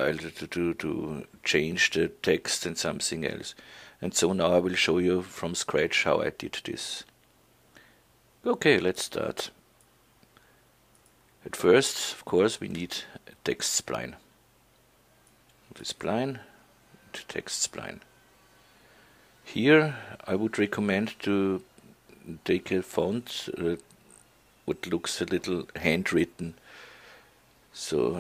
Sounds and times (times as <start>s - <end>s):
Speech: 0.0s - 7.1s, 8.4s - 9.6s, 11.4s - 14.3s, 15.7s - 18.1s, 19.4s - 23.9s, 24.6s - 26.6s, 27.7s - 28.2s.